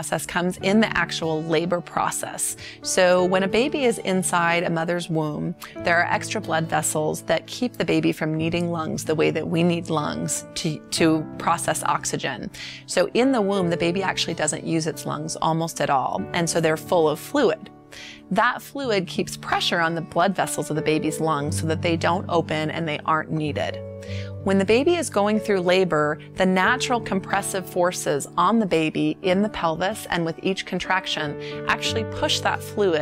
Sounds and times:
Speech: 0:00.0 - 0:17.7, 0:18.3 - 0:23.8, 0:24.4 - 0:33.0
Music: 0:00.0 - 0:33.0.

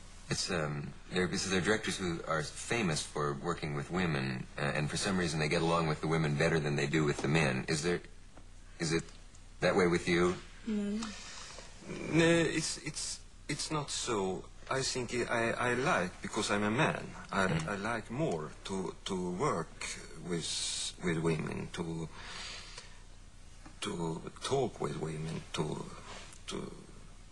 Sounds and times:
Speech: 0:00.3 - 0:08.1, 0:08.8 - 0:11.1, 0:11.9 - 0:22.1, 0:23.8 - 0:27.0.

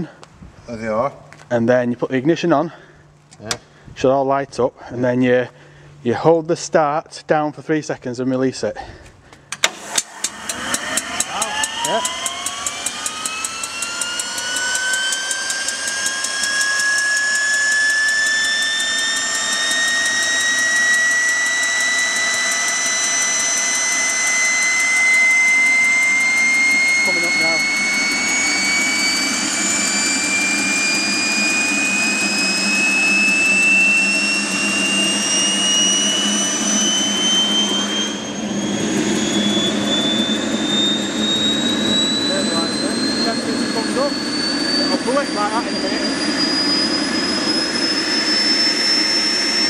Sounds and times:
Speech: 0:00.7 - 0:02.8, 0:03.4 - 0:08.8, 0:11.3 - 0:12.0, 0:27.0 - 0:27.6, 0:42.3 - 0:44.2, 0:44.8 - 0:46.0.

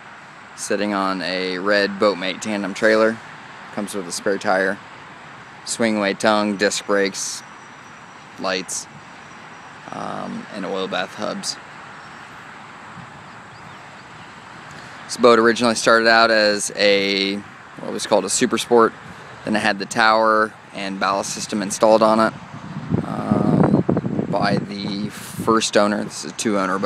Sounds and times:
Speech: 0:00.6 - 0:03.2, 0:03.8 - 0:04.8, 0:05.7 - 0:07.4, 0:08.4 - 0:08.9, 0:09.9 - 0:11.6, 0:15.1 - 0:22.4, 0:23.0 - 0:23.7, 0:24.3 - 0:26.8.

